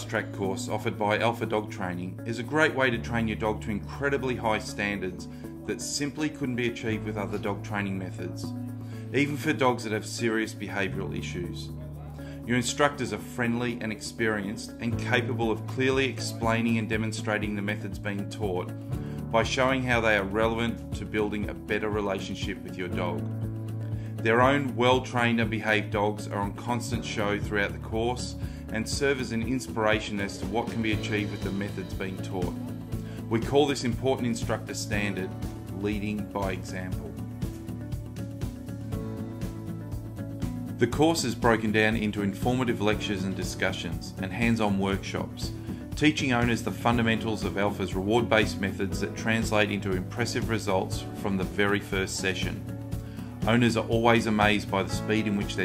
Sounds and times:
Speech: 0.0s - 8.5s, 9.1s - 18.7s, 19.3s - 23.2s, 24.2s - 32.5s, 33.3s - 37.2s, 40.8s - 52.6s, 53.4s - 55.6s
Music: 0.0s - 55.6s.

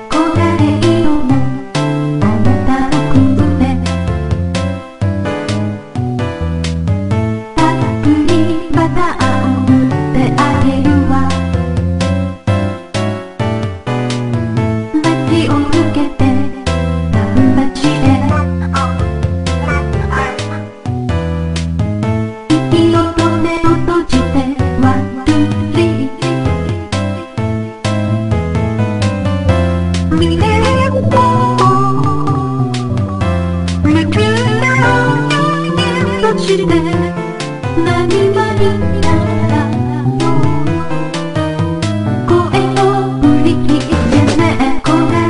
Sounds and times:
Music: 0.0s - 45.3s.

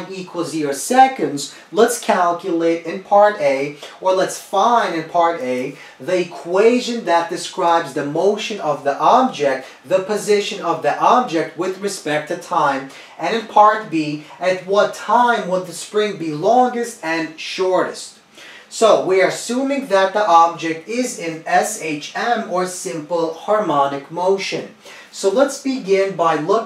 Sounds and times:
Speech: 0.0s - 26.6s.

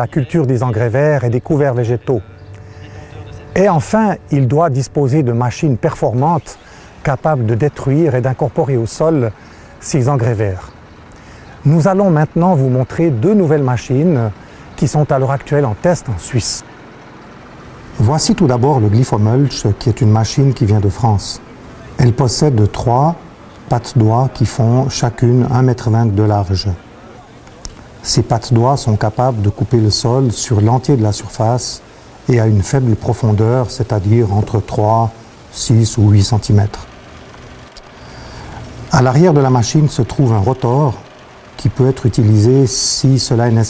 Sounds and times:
Speech: 0.0s - 10.8s, 11.5s - 16.6s, 18.0s - 36.9s, 38.9s - 43.7s.

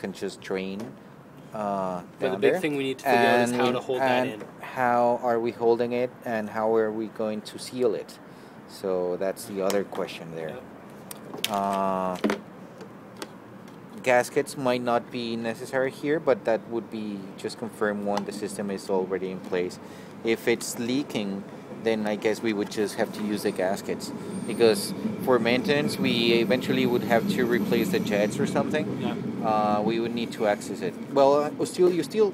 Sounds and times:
Speech: 0.0s - 0.9s, 1.6s - 10.6s, 11.5s - 12.2s, 14.0s - 32.3s.

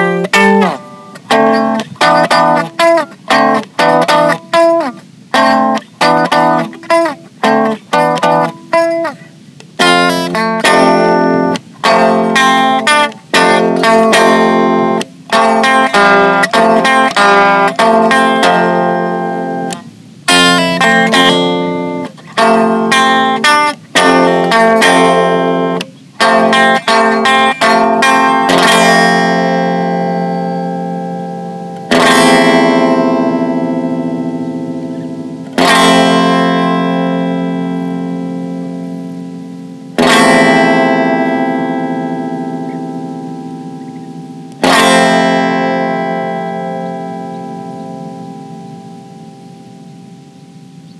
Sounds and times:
Music: 0.0s - 50.9s.

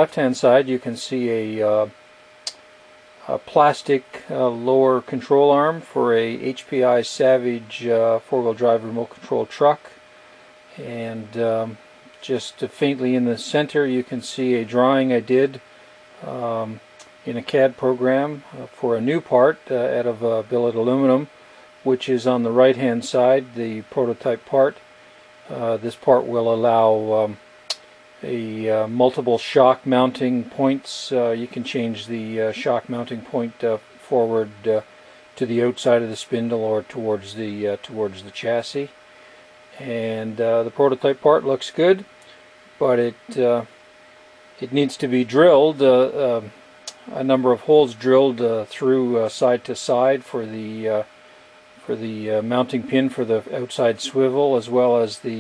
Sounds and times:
Speech: 0.0s - 2.6s, 3.2s - 10.0s, 10.7s - 15.6s, 16.2s - 24.8s, 25.5s - 39.0s, 39.7s - 42.1s, 42.8s - 43.7s, 44.6s - 51.1s, 51.8s - 55.4s.

